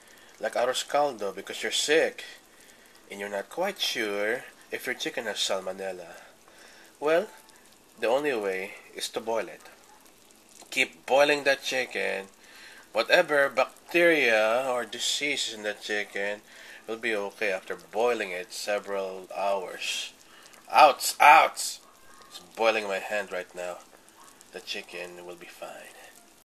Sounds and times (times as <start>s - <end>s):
Boiling: 0.0s - 26.4s
Speech: 0.4s - 2.4s, 3.1s - 6.2s, 7.0s - 7.4s, 8.0s - 9.8s, 10.7s - 23.8s, 24.5s - 26.2s.